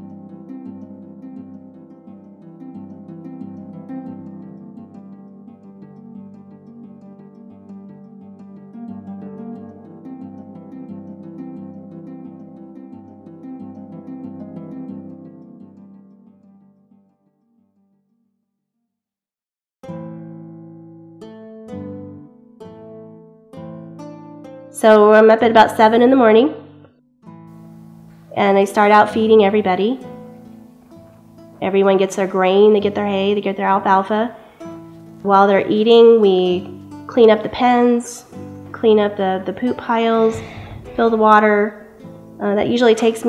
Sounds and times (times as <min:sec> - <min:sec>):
Speech: 0:24.8 - 0:26.6, 0:28.4 - 0:30.0, 0:31.6 - 0:34.4, 0:35.3 - 0:38.2, 0:38.8 - 0:41.8, 0:42.4 - 0:43.2.